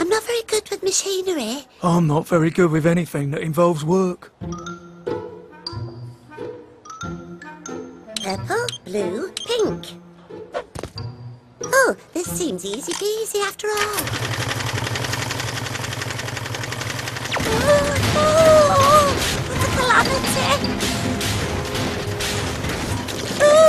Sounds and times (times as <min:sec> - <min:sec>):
Music: 0:03.5 - 0:13.9, 0:17.4 - 0:23.6.